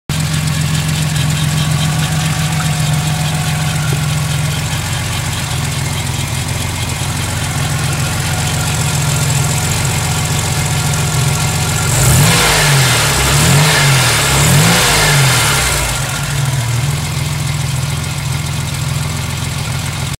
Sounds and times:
Idling: 0:00.0 - 0:20.1
Medium engine (mid frequency): 0:00.0 - 0:20.1
Car: 0:00.1 - 0:20.1
Accelerating, revving, vroom: 0:11.9 - 0:16.2.

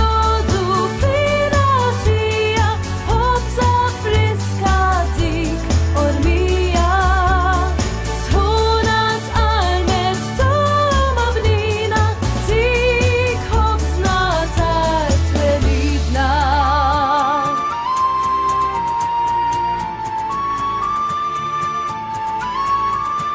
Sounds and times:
Jingle (music): 0:00.0 - 0:23.3.

